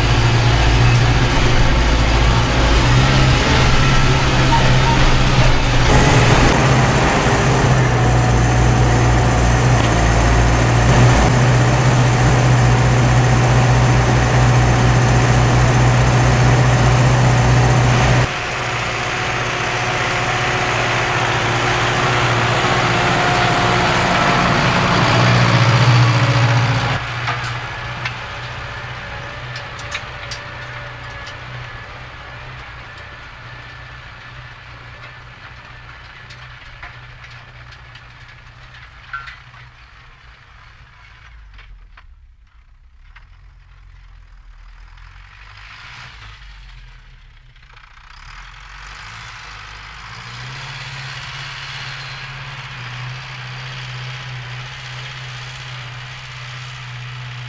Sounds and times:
Accelerating, revving, vroom: 0.0s - 27.0s, 45.1s - 46.7s, 48.0s - 57.4s
Vehicle: 0.0s - 57.4s.

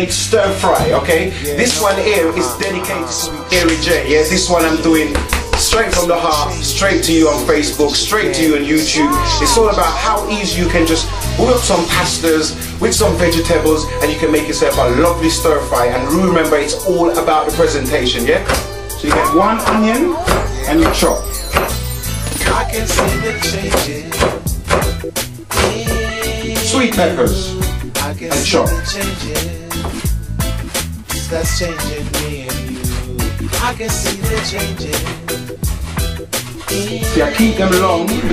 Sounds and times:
Speech: 0.0s - 21.3s, 26.7s - 27.5s, 28.2s - 29.4s, 36.7s - 38.3s
Music: 0.0s - 38.3s.

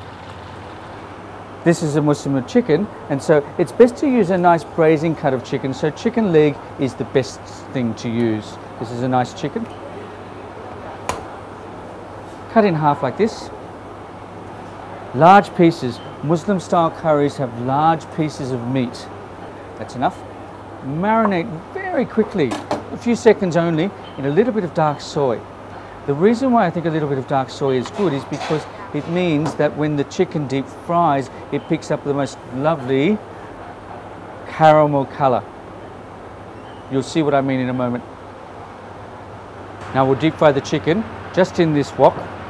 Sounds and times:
Speech: 1.6s - 9.8s, 12.5s - 13.6s, 15.1s - 19.1s, 19.8s - 20.2s, 20.8s - 25.5s, 26.1s - 33.2s, 34.5s - 35.5s, 36.9s - 38.0s, 39.9s - 42.3s.

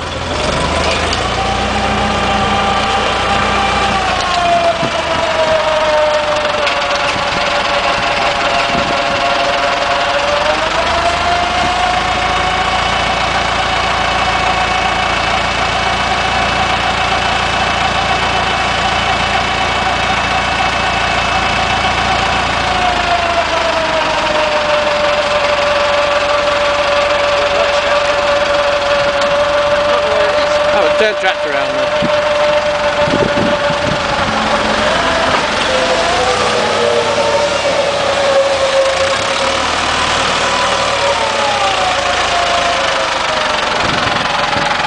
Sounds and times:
Vehicle: 0.0s - 44.8s.

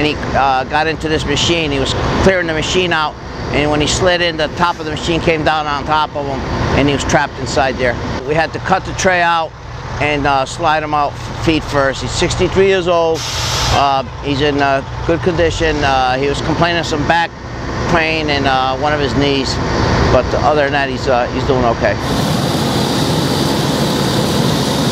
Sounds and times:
Speech: 0.0s - 13.2s, 13.8s - 17.3s, 17.9s - 22.0s.

